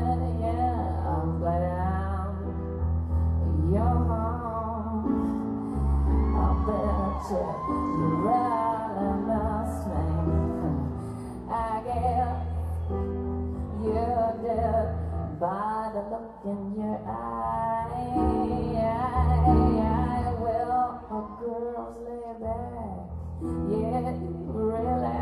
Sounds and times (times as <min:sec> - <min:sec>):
Music: 0:00.0 - 0:25.2.